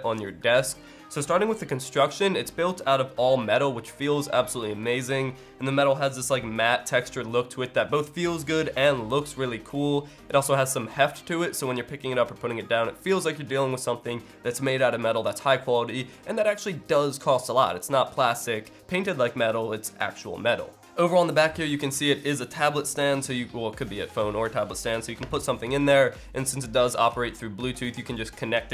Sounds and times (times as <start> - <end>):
Music: 0.0 - 28.7
Speech: 0.0 - 28.7.